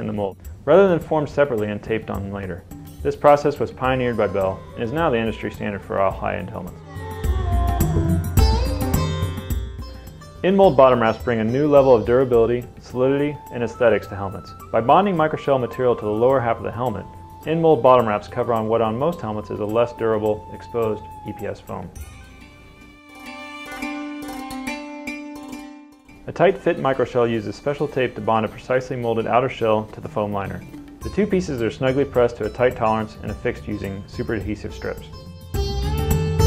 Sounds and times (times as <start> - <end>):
Speech: 0.0 - 6.8, 10.4 - 22.0, 26.3 - 35.2
Music: 0.0 - 36.4.